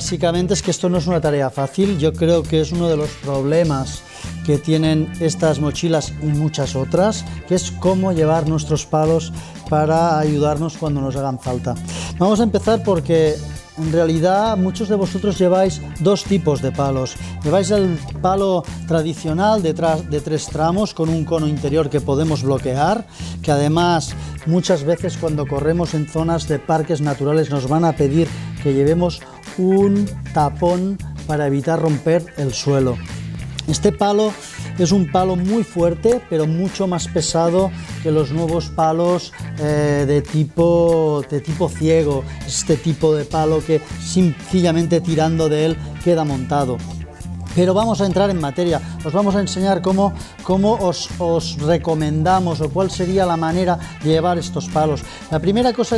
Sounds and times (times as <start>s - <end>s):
Speech: 0.0s - 33.0s, 33.6s - 46.9s, 47.5s - 55.9s
Music: 0.0s - 55.9s.